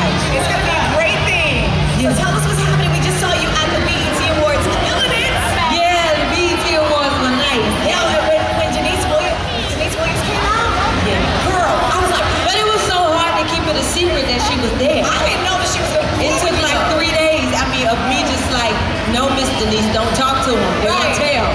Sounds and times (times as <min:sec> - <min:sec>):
Speech: 0:00.0 - 0:21.5.